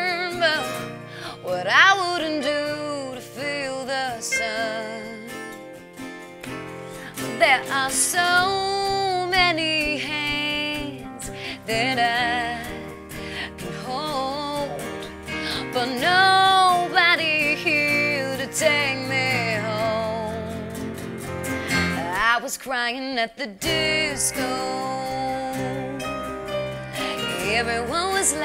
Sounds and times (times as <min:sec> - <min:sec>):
Music: 0:00.0 - 0:28.4.